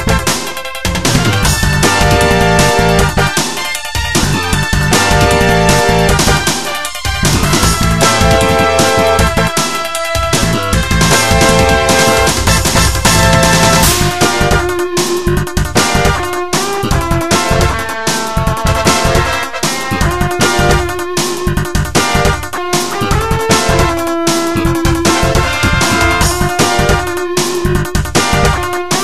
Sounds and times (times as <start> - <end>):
Theme music: 0.0 - 29.0.